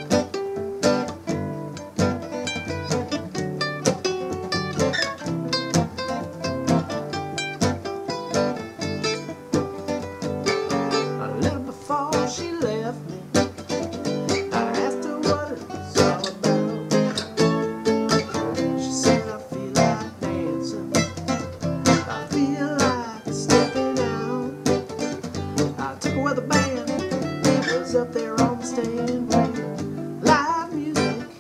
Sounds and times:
Music: 0.0 - 31.4.

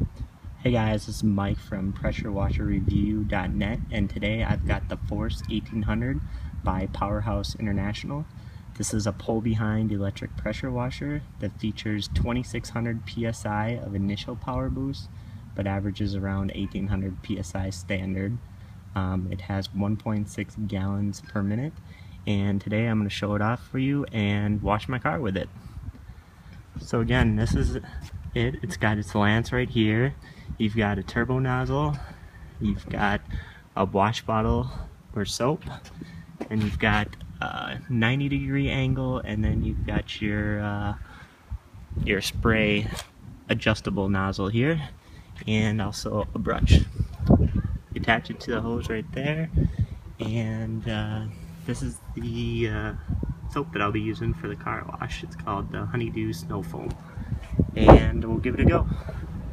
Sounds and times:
Speech: 0.6 - 25.5, 26.8 - 33.2, 33.8 - 35.9, 36.5 - 41.0, 42.0 - 46.9, 47.5 - 49.6, 50.2 - 57.0, 57.8 - 59.0.

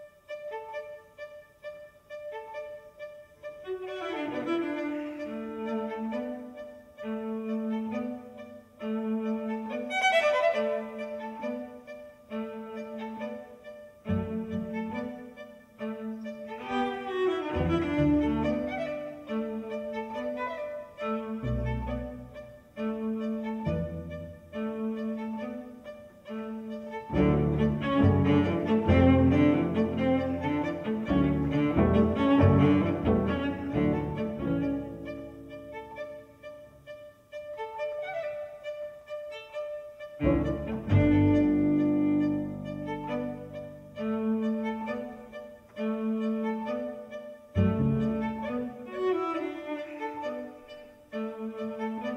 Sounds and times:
Cello: 0.0 - 52.1
Violin, fiddle: 0.0 - 52.1
Double bass: 17.5 - 18.9, 21.4 - 24.6, 27.1 - 36.2, 40.2 - 45.0, 47.6 - 48.7.

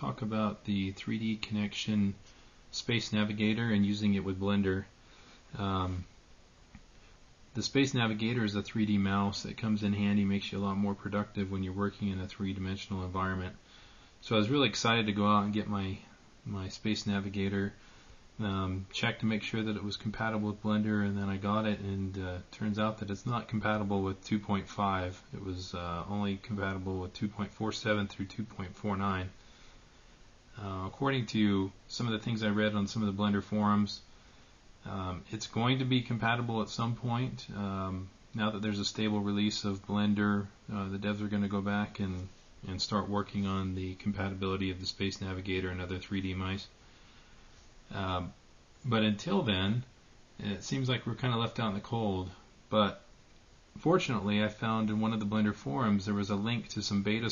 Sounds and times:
Speech: 0.0 - 6.1, 7.5 - 13.6, 14.2 - 17.8, 18.4 - 29.4, 30.5 - 34.1, 34.8 - 46.8, 47.9 - 53.1, 53.8 - 57.3.

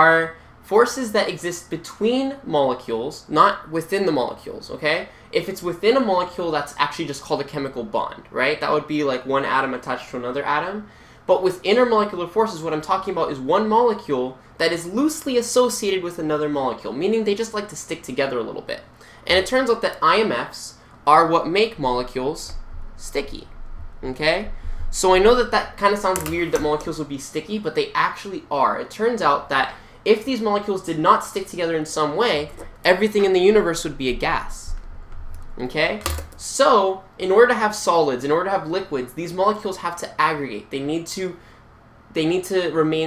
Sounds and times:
Speech: 0.0 - 34.8, 35.6 - 41.4, 42.1 - 43.0.

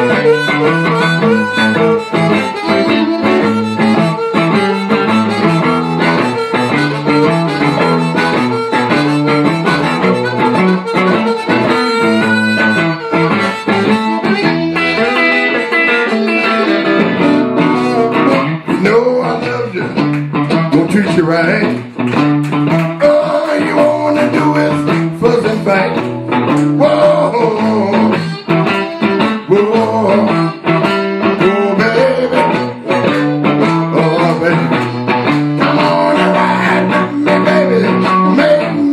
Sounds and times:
Blues: 0.0 - 38.9
Guitar: 0.0 - 38.9
Singing: 23.0 - 26.0, 26.8 - 30.6, 31.3 - 38.9.

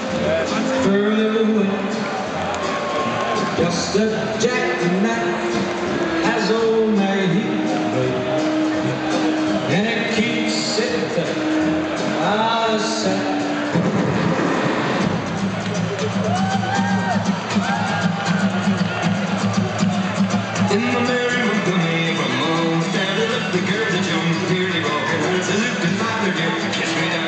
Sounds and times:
Music: 0.0 - 27.2
Speech: 0.2 - 2.0, 3.6 - 5.5, 6.2 - 8.2, 9.7 - 11.4, 12.2 - 13.4, 20.7 - 27.2.

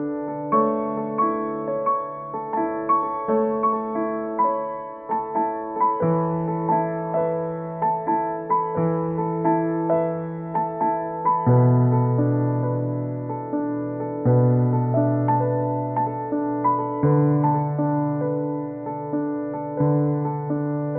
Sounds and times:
Music: 0.0 - 20.9.

